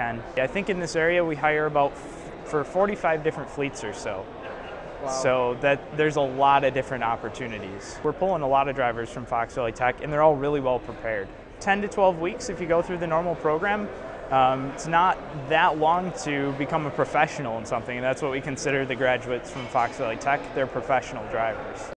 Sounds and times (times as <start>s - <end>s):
Speech: 0.0s - 4.3s, 5.0s - 21.9s.